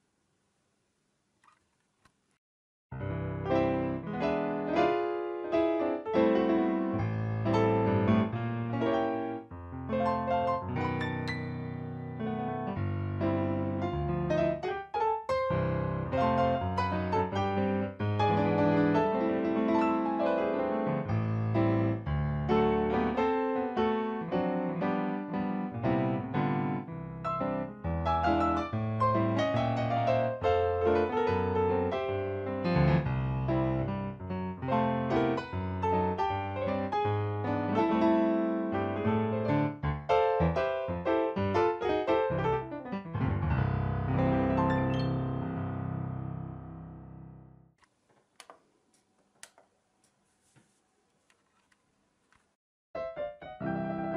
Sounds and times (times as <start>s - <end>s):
Music: 2.9s - 47.8s, 53.0s - 54.1s.